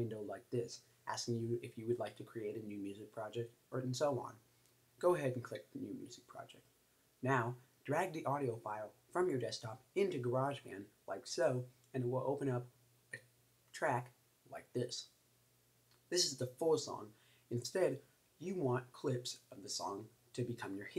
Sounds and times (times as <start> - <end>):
Speech: 0.0 - 4.4, 5.0 - 15.2, 16.1 - 20.9.